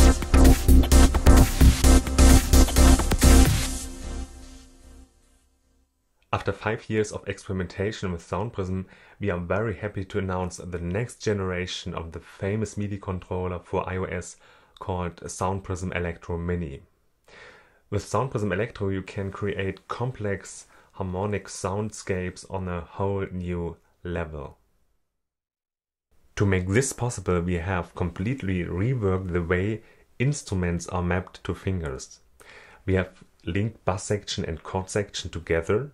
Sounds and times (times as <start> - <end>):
Speech: 6.3 - 16.9, 17.9 - 24.6, 26.4 - 32.2, 32.8 - 35.9.